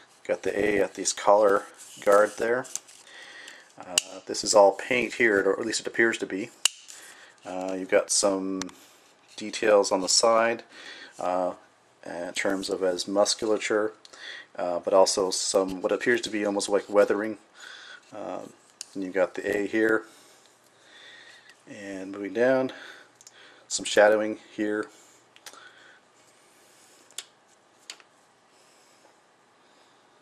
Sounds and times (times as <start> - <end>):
Speech: 0.2 - 2.8, 3.8 - 6.6, 7.4 - 8.8, 9.4 - 14.0, 14.6 - 17.4, 18.1 - 20.1, 21.7 - 22.8, 23.7 - 25.0.